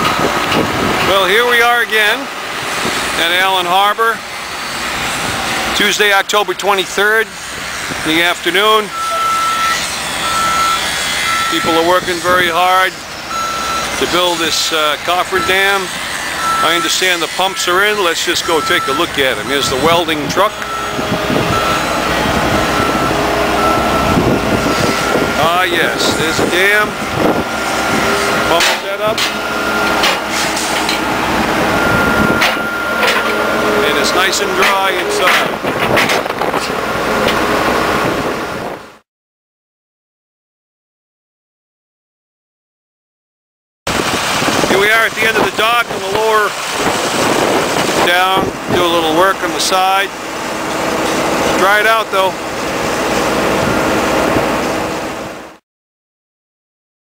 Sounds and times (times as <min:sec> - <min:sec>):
Speech: 0:01.1 - 0:02.3, 0:03.2 - 0:04.2, 0:05.8 - 0:07.4, 0:08.0 - 0:08.9, 0:11.5 - 0:13.0, 0:14.0 - 0:15.9, 0:16.6 - 0:20.6, 0:25.4 - 0:27.0, 0:28.5 - 0:29.2, 0:33.8 - 0:35.5, 0:44.7 - 0:46.6, 0:48.0 - 0:50.2, 0:51.5 - 0:52.4.